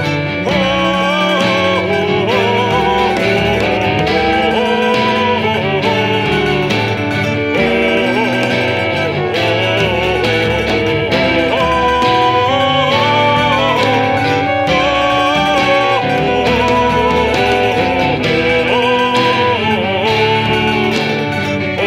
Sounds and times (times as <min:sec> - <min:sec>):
Country: 0:00.0 - 0:21.8.